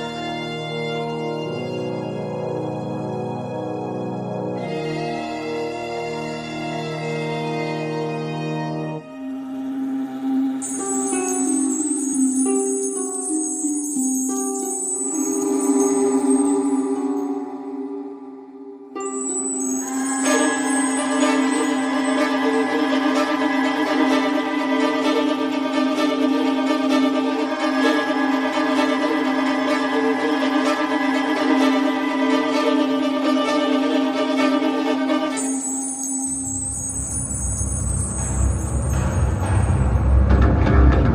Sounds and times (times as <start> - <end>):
Violin, fiddle: 0.0 - 9.1, 19.7 - 36.4
String section: 0.0 - 41.1.